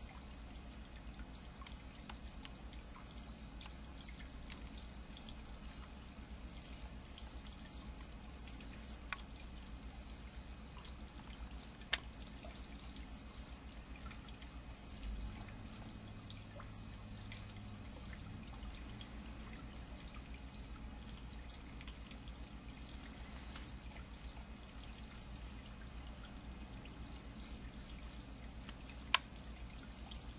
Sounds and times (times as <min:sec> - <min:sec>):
Bird: 0:16.6 - 0:18.2, 0:29.7 - 0:30.3.